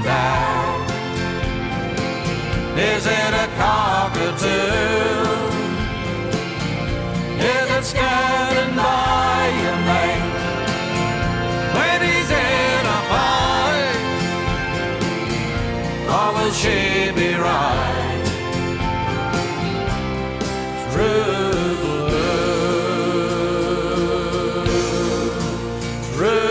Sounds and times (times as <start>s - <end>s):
Singing: 0.0s - 1.2s, 2.8s - 6.0s, 7.4s - 10.9s, 11.7s - 14.2s, 16.0s - 18.4s, 20.8s - 26.5s
Music: 0.0s - 26.5s.